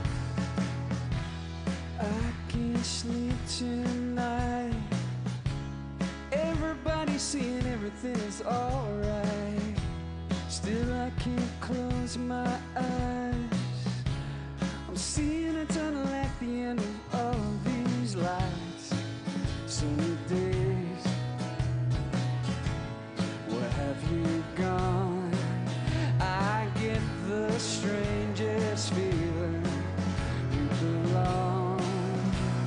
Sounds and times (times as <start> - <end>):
Music: 0.0 - 32.6.